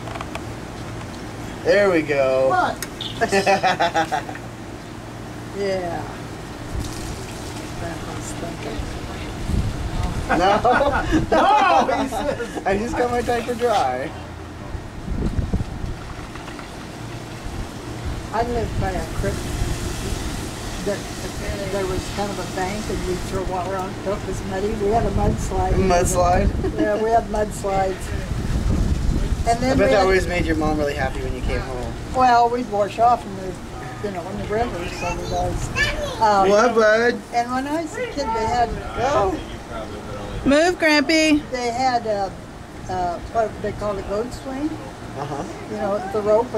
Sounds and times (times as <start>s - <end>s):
Outside, urban or manmade: 0.0s - 46.5s
Hubbub, speech noise, speech babble: 18.8s - 46.5s
Child speech, kid speaking: 33.8s - 36.8s, 37.8s - 39.4s, 45.8s - 46.4s.